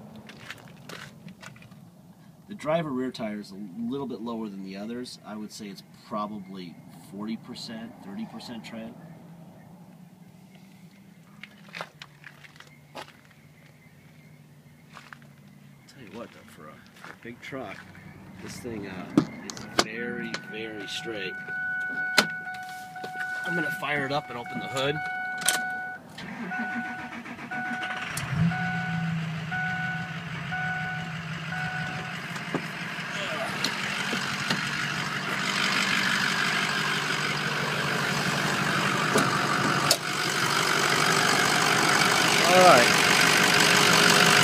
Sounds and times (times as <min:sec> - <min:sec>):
Vehicle: 0:00.0 - 0:44.4
Speech: 0:02.5 - 0:09.0, 0:15.9 - 0:17.8, 0:18.4 - 0:21.4, 0:23.4 - 0:25.0, 0:42.4 - 0:42.9.